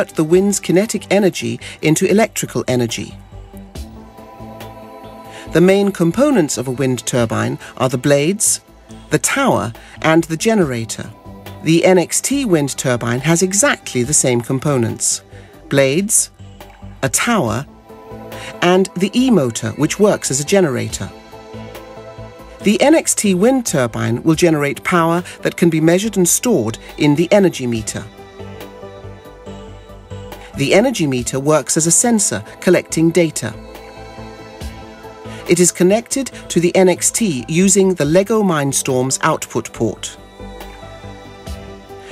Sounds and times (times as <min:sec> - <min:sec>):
Speech: 0:00.0 - 0:03.2, 0:05.5 - 0:16.3, 0:17.0 - 0:17.7, 0:18.5 - 0:21.1, 0:22.6 - 0:28.1, 0:30.6 - 0:33.6, 0:35.5 - 0:40.2
Music: 0:00.0 - 0:42.1.